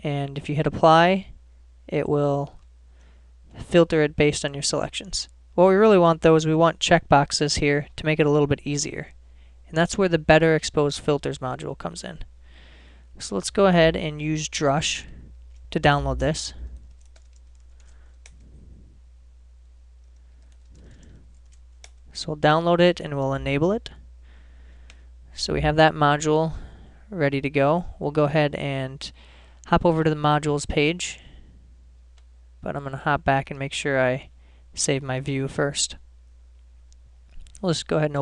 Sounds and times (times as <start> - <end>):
Speech: 0.0 - 2.6, 3.6 - 12.3, 13.2 - 15.2, 15.8 - 16.7, 22.2 - 24.0, 25.3 - 31.3, 32.6 - 36.0, 37.6 - 38.2.